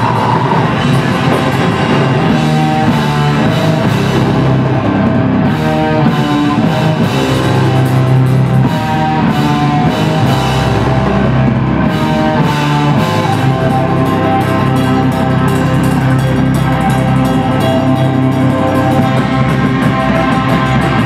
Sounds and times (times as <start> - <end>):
Drum: 0.0 - 21.0
Drum kit: 0.0 - 21.0
Guitar: 0.0 - 21.0
Rock music: 0.0 - 21.0.